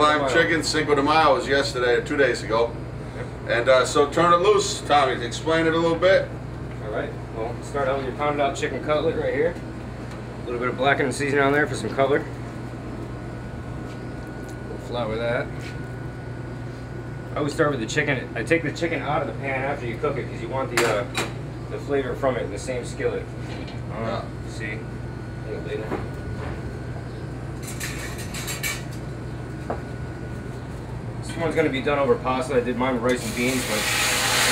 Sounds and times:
Speech: 0.0s - 2.8s, 3.5s - 9.6s, 10.5s - 12.4s, 14.7s - 15.5s, 17.4s - 23.3s, 23.9s - 26.0s, 31.2s - 33.9s.

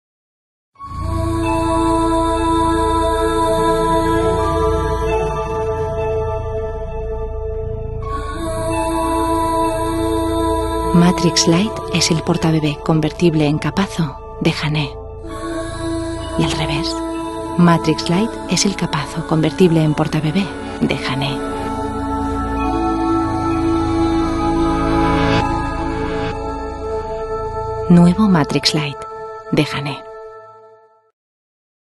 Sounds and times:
Music: 0.8s - 31.1s
Speech: 10.9s - 15.0s, 16.3s - 17.0s, 17.6s - 21.5s, 27.9s - 30.0s.

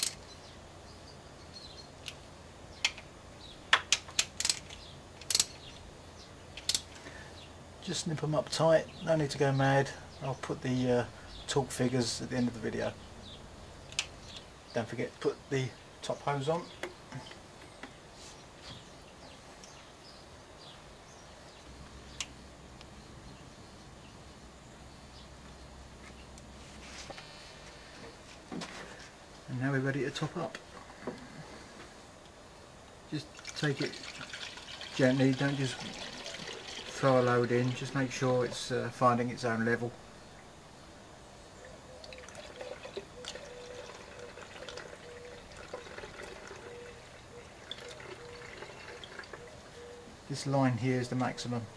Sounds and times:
Speech: 7.8s - 13.0s, 14.7s - 16.7s, 29.5s - 30.6s, 33.1s - 34.0s, 35.0s - 36.0s, 36.9s - 40.0s, 50.3s - 51.7s
Liquid: 33.2s - 38.0s, 42.0s - 49.5s.

